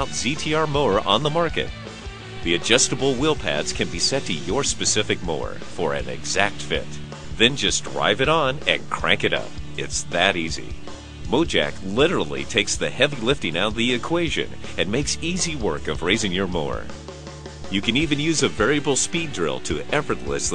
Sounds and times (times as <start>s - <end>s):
Speech: 0.0s - 1.7s, 2.4s - 16.9s, 17.7s - 20.5s
Music: 0.0s - 20.5s.